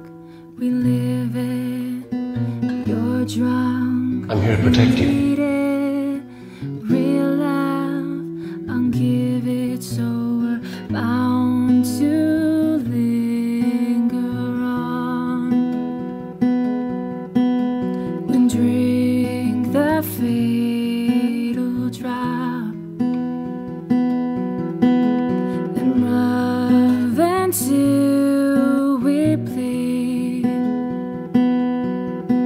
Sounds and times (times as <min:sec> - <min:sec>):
Music: 0:00.0 - 0:32.4.